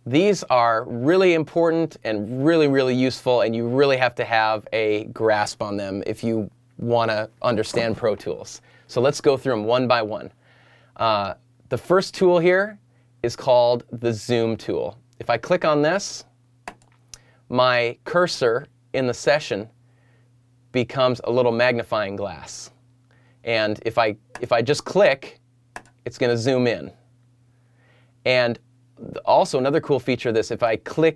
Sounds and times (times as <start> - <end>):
Speech: 0.0 - 10.4, 11.0 - 16.3, 17.5 - 19.7, 20.7 - 22.8, 23.5 - 25.4, 26.0 - 27.0, 28.3 - 31.1.